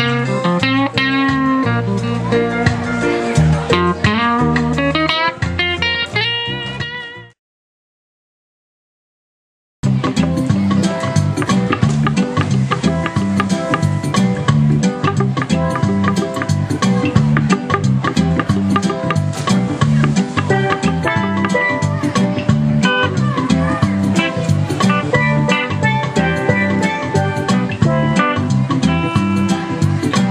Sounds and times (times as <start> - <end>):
Guitar: 0.0 - 7.4, 9.8 - 30.3.